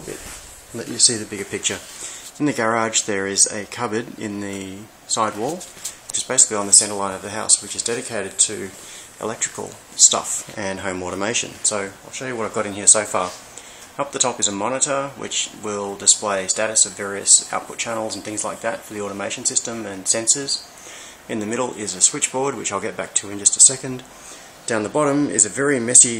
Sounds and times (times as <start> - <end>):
Speech: 0.0 - 13.4, 14.0 - 20.7, 21.3 - 24.1, 24.7 - 26.1.